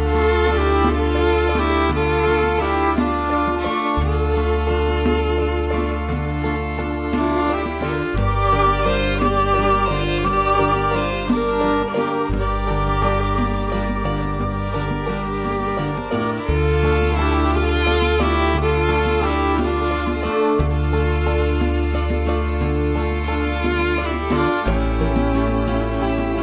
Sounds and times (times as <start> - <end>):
Music: 0.0 - 26.4.